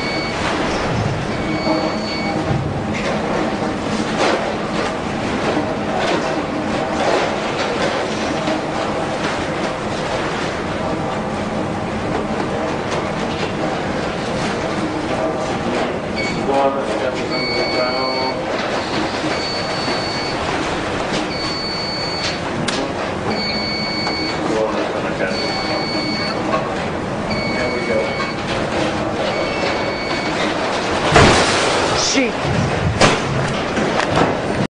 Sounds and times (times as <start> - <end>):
Speech: 16.4 - 18.4, 31.9 - 32.4.